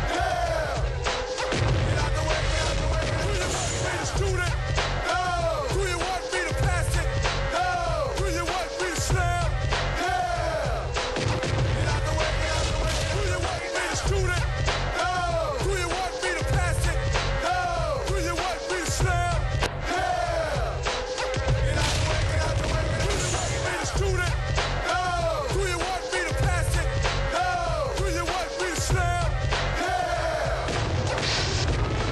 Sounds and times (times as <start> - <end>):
Music: 0.0 - 32.1.